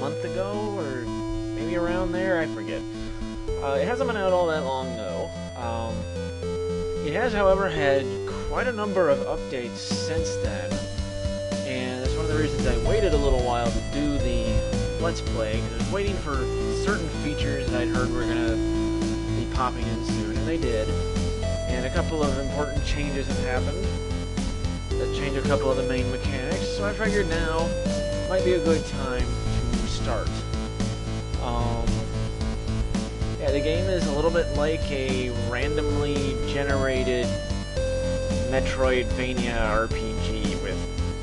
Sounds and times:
Speech: 0:00.0 - 0:02.9, 0:03.6 - 0:06.0, 0:07.0 - 0:10.9, 0:11.7 - 0:18.6, 0:19.4 - 0:21.0, 0:21.7 - 0:23.9, 0:25.0 - 0:30.4, 0:31.4 - 0:32.0, 0:33.4 - 0:37.4, 0:38.5 - 0:40.8
Music: 0:00.0 - 0:41.2.

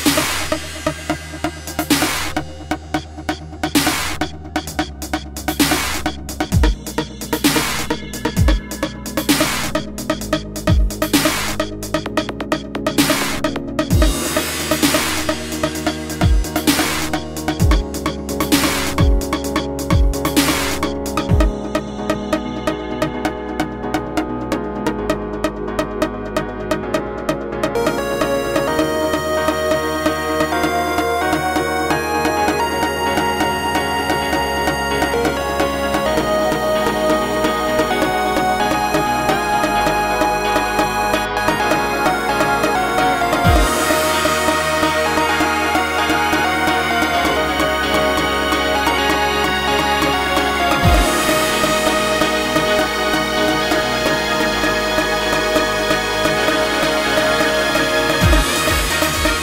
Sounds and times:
Dubstep: 0:00.0 - 0:59.4
Electronica: 0:00.0 - 0:59.4.

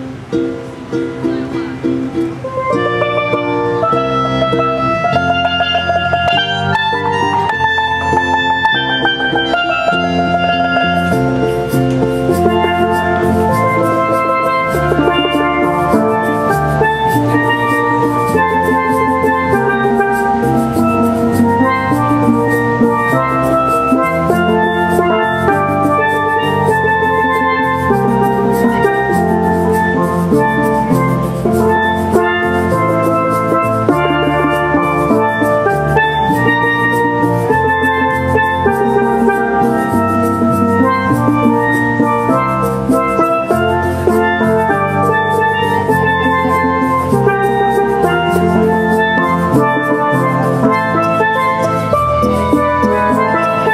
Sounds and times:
Music: 0:00.0 - 0:53.7.

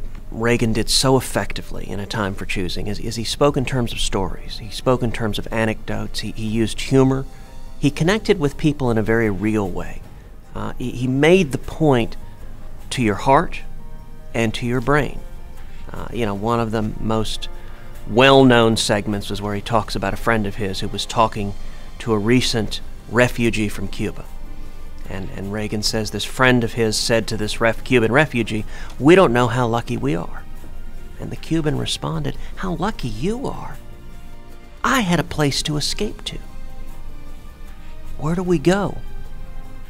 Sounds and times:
Music: 0:00.0 - 0:39.8
Male speech, man speaking: 0:00.3 - 0:10.0, 0:10.6 - 0:12.2, 0:12.9 - 0:13.7, 0:14.4 - 0:15.2, 0:15.9 - 0:17.5, 0:18.1 - 0:24.3, 0:25.1 - 0:30.4, 0:31.2 - 0:33.8, 0:34.8 - 0:36.5, 0:38.2 - 0:39.1.

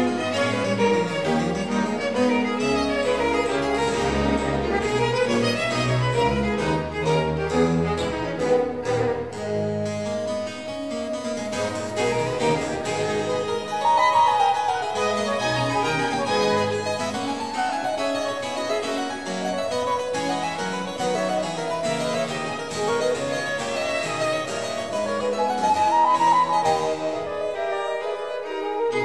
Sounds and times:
Harpsichord: 0:00.0 - 0:29.0.

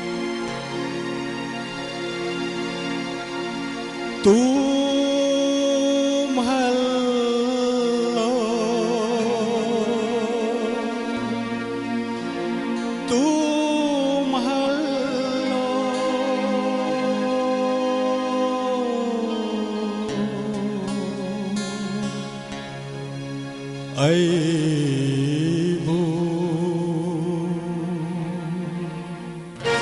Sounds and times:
Music: 0:00.0 - 0:29.8.

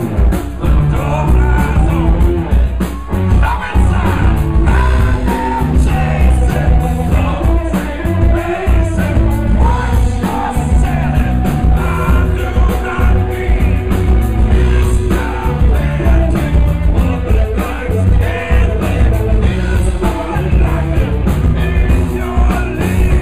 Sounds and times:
Music: 0:00.0 - 0:23.2.

